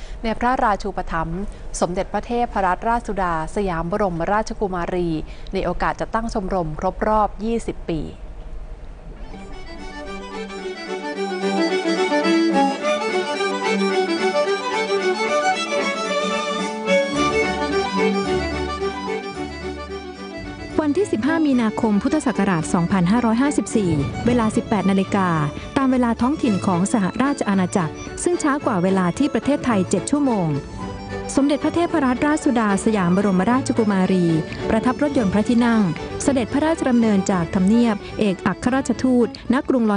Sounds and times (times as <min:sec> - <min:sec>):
Speech: 0:00.3 - 0:08.2, 0:20.8 - 0:30.6, 0:31.4 - 0:39.9
Wedding music: 0:09.3 - 0:39.4.